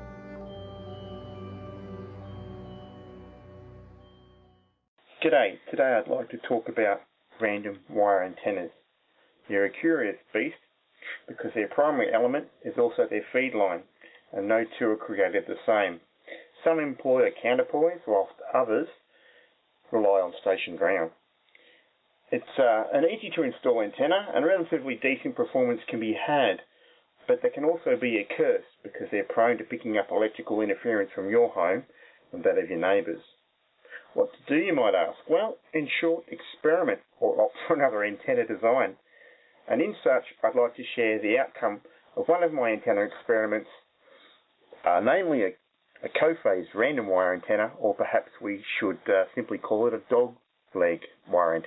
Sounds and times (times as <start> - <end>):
Speech: 5.1 - 8.8, 9.4 - 19.0, 19.9 - 21.2, 22.3 - 39.0, 39.6 - 43.9, 44.8 - 51.6.